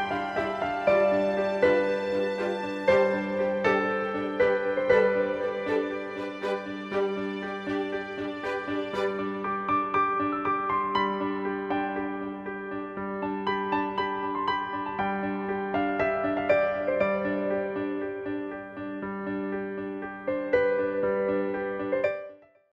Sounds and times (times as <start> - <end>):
Music: 0.0 - 22.7.